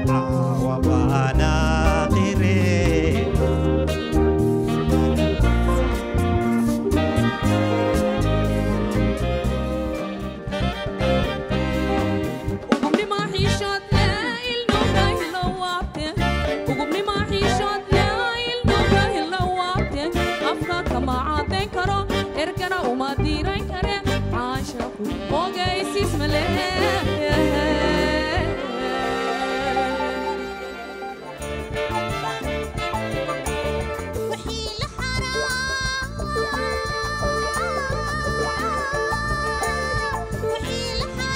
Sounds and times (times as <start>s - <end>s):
Blues: 0.0s - 41.3s.